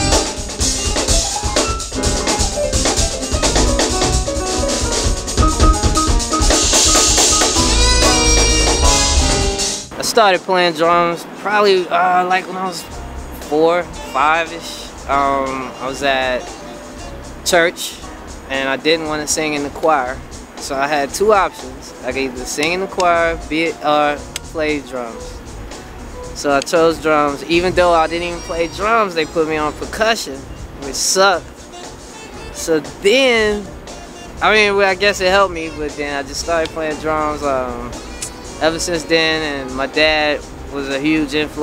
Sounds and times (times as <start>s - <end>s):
Percussion: 0.0s - 10.0s, 12.9s - 41.6s
Speech: 9.9s - 16.5s, 17.4s - 25.3s, 26.4s - 31.5s, 32.6s - 33.7s, 34.4s - 38.0s, 38.6s - 41.6s.